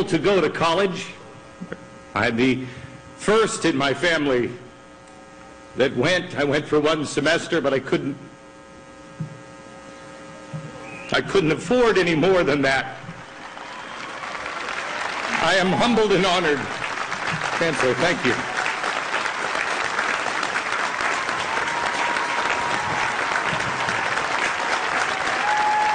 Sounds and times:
Narration, monologue: 0.0s - 9.6s, 11.1s - 13.2s, 15.4s - 16.8s, 17.6s - 18.5s.

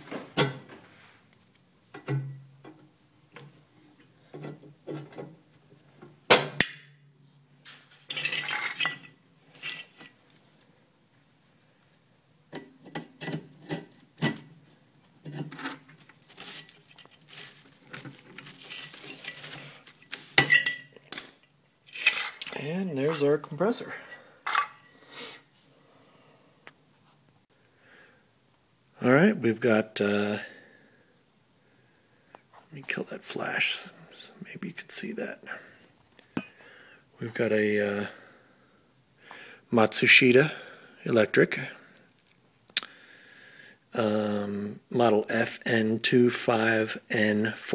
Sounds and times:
Inside, small room: 0.0s - 47.7s.

